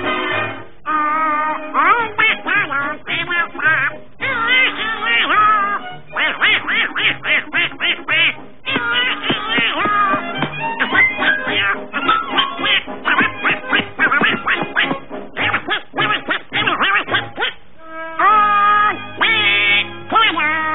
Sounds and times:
Music: 0:00.0 - 0:20.7
Quack: 0:01.1 - 0:10.2, 0:10.8 - 0:17.6, 0:19.2 - 0:20.7.

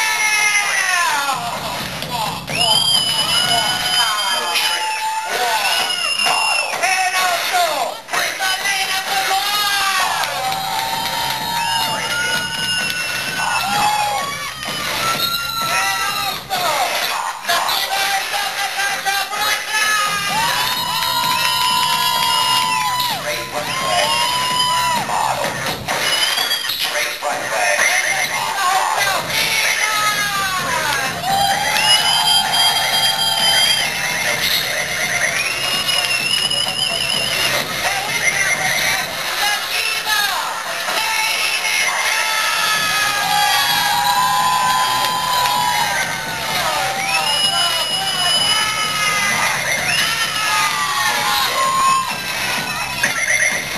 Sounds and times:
Music: 0:00.0 - 0:53.7
Speech: 0:06.8 - 0:10.3, 0:15.8 - 0:20.4.

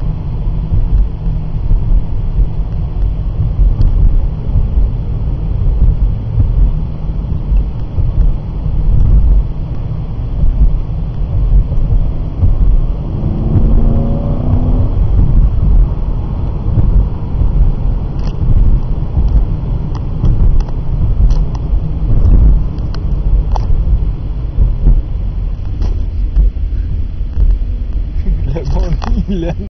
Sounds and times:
Speech: 0:28.2 - 0:29.6.

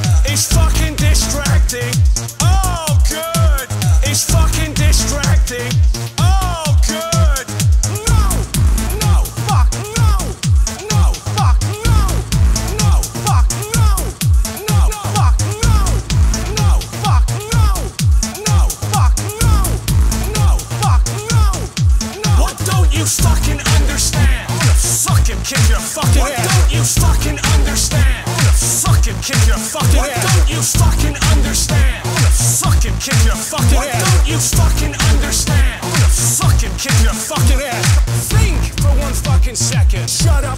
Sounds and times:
Pop music: 0:00.0 - 0:40.5.

